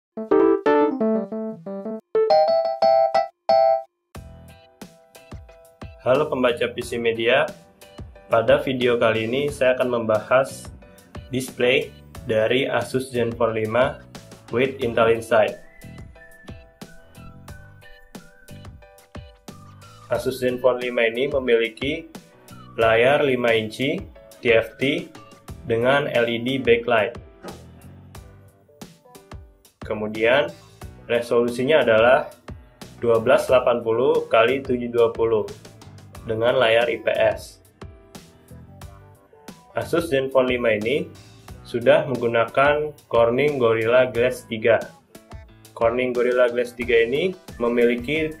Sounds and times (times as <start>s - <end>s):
Music: 0.1s - 48.4s
Speech: 6.0s - 7.6s, 8.3s - 10.7s, 11.3s - 15.6s, 20.1s - 22.1s, 22.8s - 25.1s, 25.7s - 27.2s, 29.8s - 32.4s, 33.0s - 35.6s, 36.2s - 37.6s, 39.8s - 45.0s, 45.8s - 48.4s.